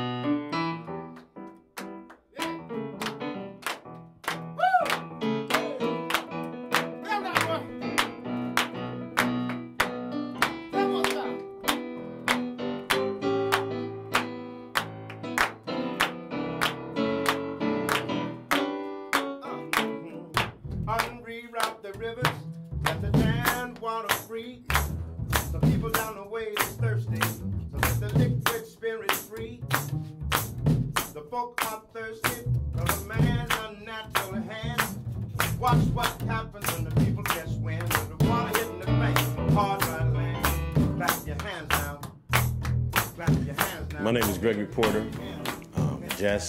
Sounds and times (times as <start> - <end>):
Music: 0.0 - 46.4.